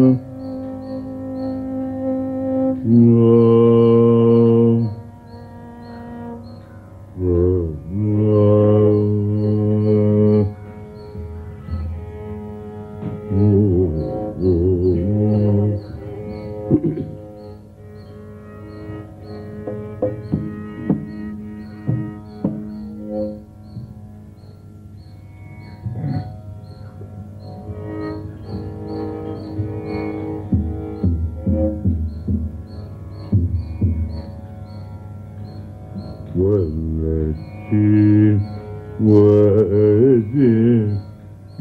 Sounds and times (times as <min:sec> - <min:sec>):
Carnatic music: 0:00.0 - 0:41.6.